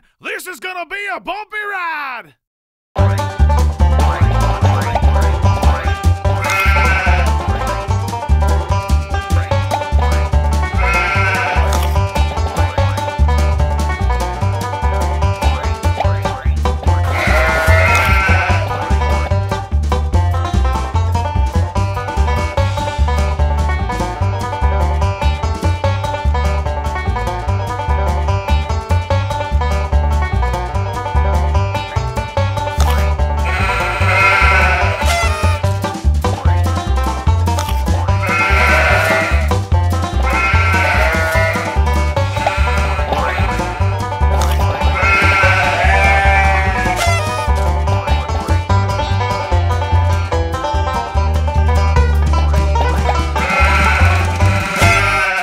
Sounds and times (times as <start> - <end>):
Music: 3.0 - 55.4
Bleat: 6.4 - 7.4, 10.8 - 11.8, 17.1 - 19.3, 33.5 - 35.6, 38.2 - 39.5, 40.3 - 43.8, 44.9 - 47.5, 53.4 - 55.4.